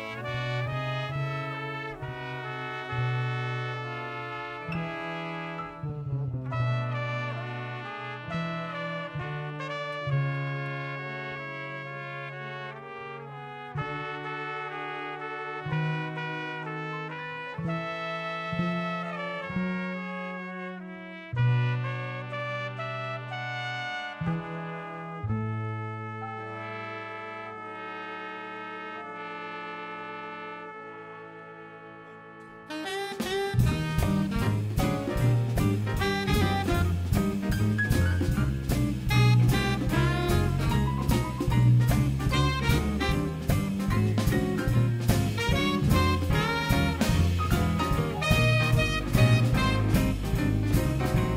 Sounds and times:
Classical music: 0.0s - 51.3s
Orchestra: 0.0s - 51.3s
Trombone: 0.0s - 51.3s.

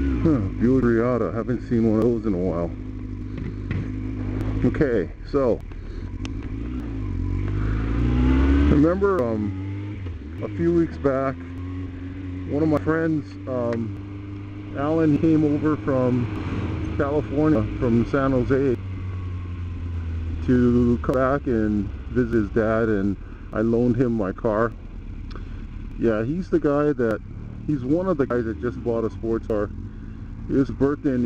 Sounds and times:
Speech: 0.2s - 2.8s, 4.6s - 5.6s, 8.7s - 9.6s, 10.4s - 11.4s, 12.5s - 14.0s, 14.7s - 16.3s, 17.0s - 18.8s, 20.4s - 24.8s, 26.0s - 29.7s, 30.5s - 31.2s.

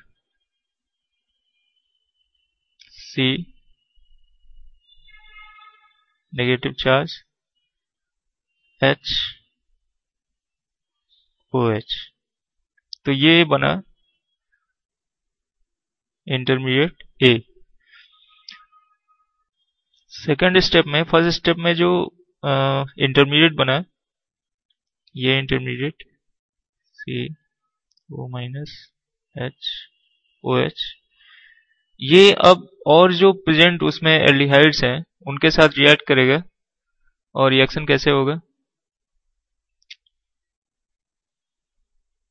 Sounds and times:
Speech: 2.8s - 3.6s, 6.3s - 7.3s, 8.8s - 9.5s, 11.5s - 12.2s, 13.0s - 14.0s, 16.3s - 17.6s, 20.1s - 24.0s, 25.2s - 26.1s, 27.0s - 27.5s, 28.1s - 31.1s, 32.0s - 36.6s, 37.4s - 38.5s.

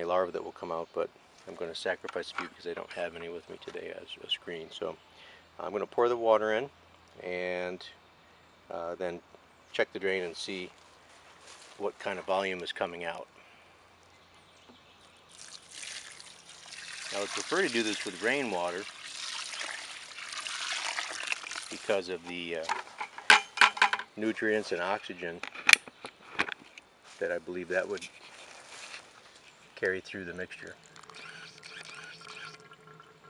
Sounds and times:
Speech: 0.0s - 5.0s, 5.6s - 8.0s, 8.7s - 9.2s, 9.8s - 10.7s, 11.8s - 13.3s, 17.1s - 18.9s, 21.7s - 22.7s, 24.2s - 25.4s, 27.2s - 28.1s, 29.8s - 30.8s
Trickle, dribble: 15.3s - 22.4s, 30.6s - 33.2s.

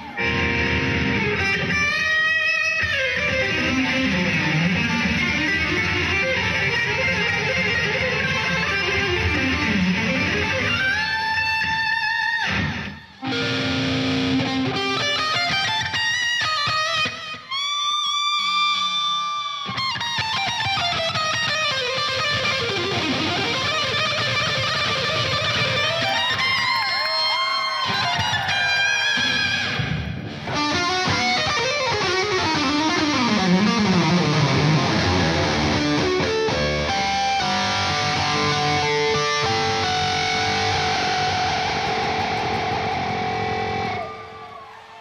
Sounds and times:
Electric guitar: 0.0s - 45.0s.

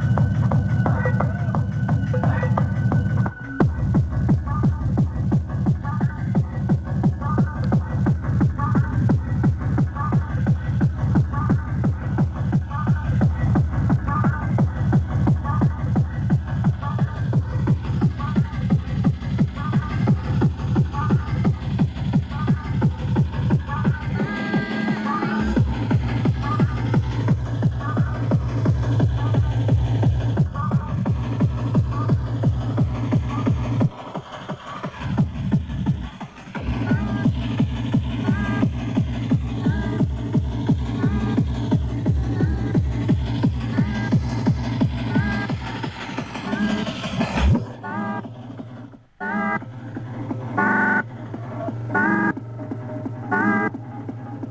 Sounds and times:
Music: 0.0s - 54.5s.

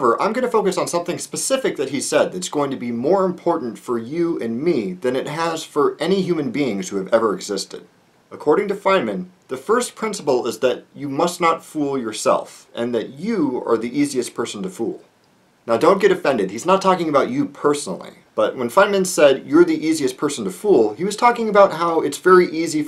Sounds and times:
Speech: 0.0s - 22.8s.

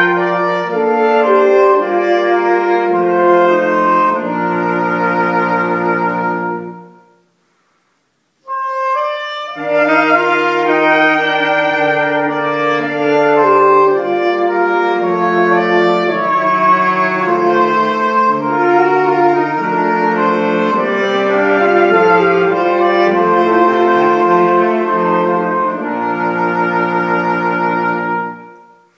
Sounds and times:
Music: 0.0s - 28.9s.

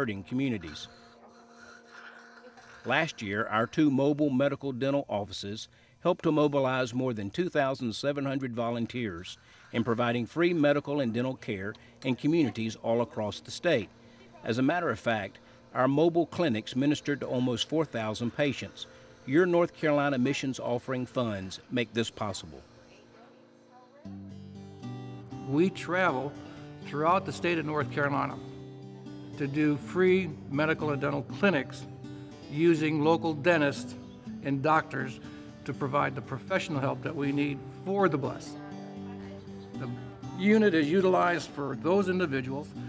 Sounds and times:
Speech: 0.0s - 0.9s, 2.8s - 23.3s, 25.5s - 26.3s, 26.9s - 28.4s, 29.4s - 31.8s, 32.5s - 38.6s, 39.2s - 42.7s
Music: 0.0s - 4.8s, 8.2s - 42.8s.

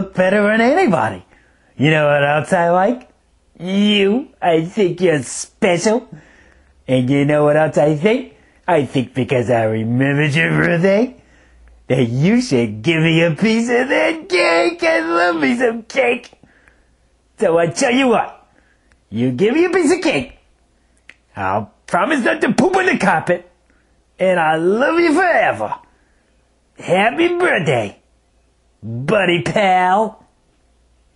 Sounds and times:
Speech: 0.0s - 6.2s, 6.8s - 11.2s, 11.9s - 16.4s, 17.4s - 18.5s, 19.1s - 20.4s, 21.3s - 23.6s, 24.2s - 25.9s, 26.8s - 28.1s, 28.8s - 30.3s.

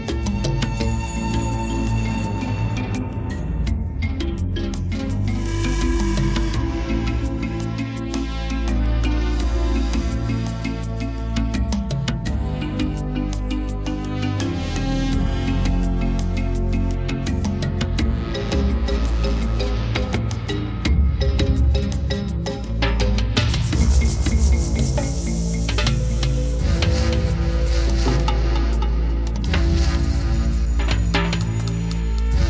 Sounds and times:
Music: 0.0s - 32.5s.

